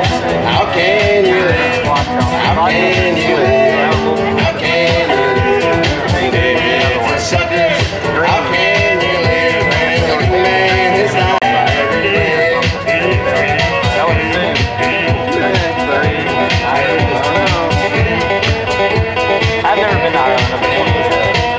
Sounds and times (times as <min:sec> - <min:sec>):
Speech: 0:00.0 - 0:18.5, 0:19.6 - 0:21.5.